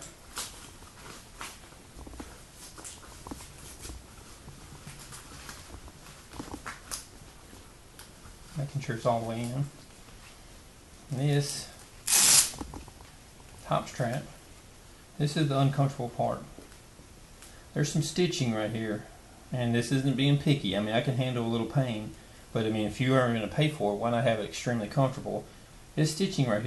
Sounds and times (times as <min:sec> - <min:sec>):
Inside, small room: 0:00.0 - 0:26.6
Speech: 0:08.6 - 0:09.8, 0:11.1 - 0:11.8, 0:13.6 - 0:14.4, 0:15.2 - 0:16.6, 0:17.7 - 0:26.6.